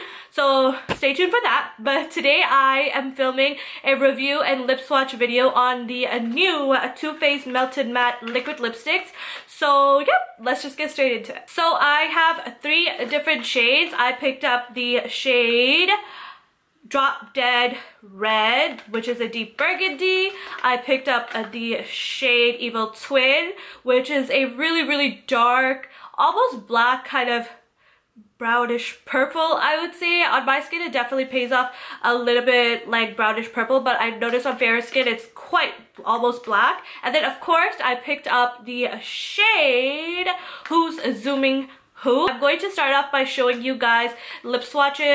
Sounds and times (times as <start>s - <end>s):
Speech: 0.0s - 16.1s, 16.9s - 27.6s, 28.4s - 45.1s.